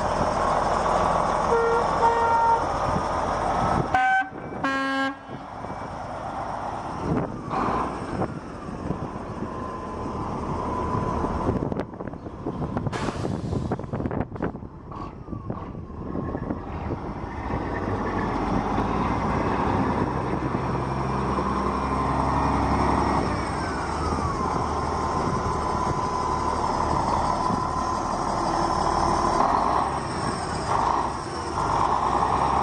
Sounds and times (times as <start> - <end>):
Truck: 0.0 - 32.6.